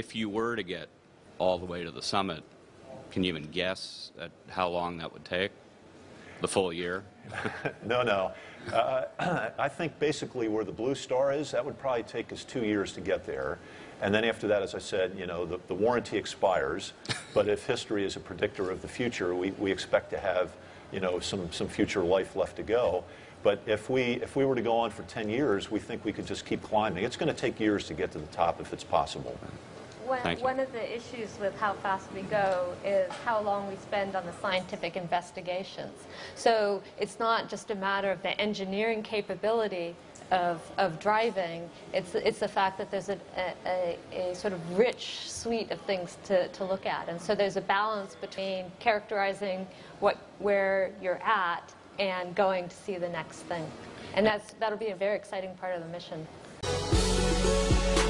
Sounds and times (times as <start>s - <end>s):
Female speech, woman speaking: 30.0s - 56.3s.